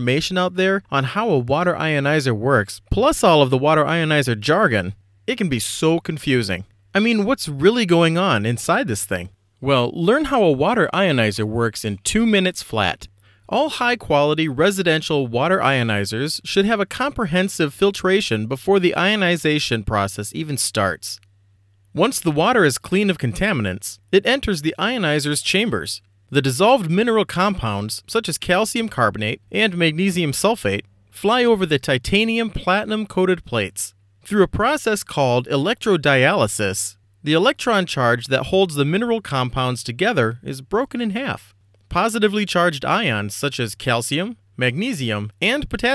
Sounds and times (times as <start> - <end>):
Speech: 0.0 - 21.2, 22.0 - 45.9.